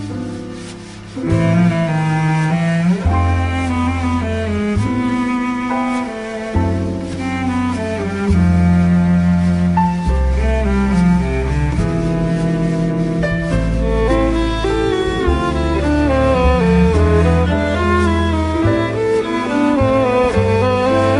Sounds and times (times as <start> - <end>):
Music: 0.0 - 21.2.